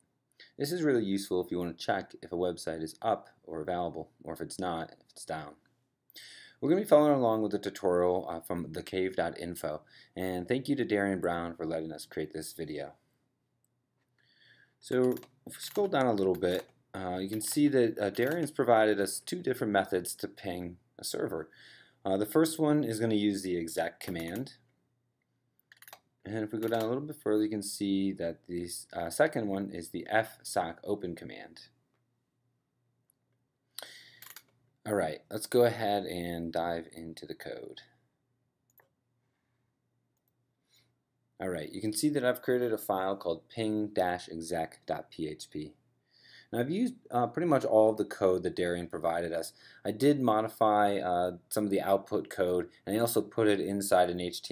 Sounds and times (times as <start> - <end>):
Speech: 0.5 - 5.6, 6.6 - 13.0, 14.8 - 24.6, 26.3 - 31.8, 34.8 - 38.0, 41.4 - 45.8, 46.5 - 54.5.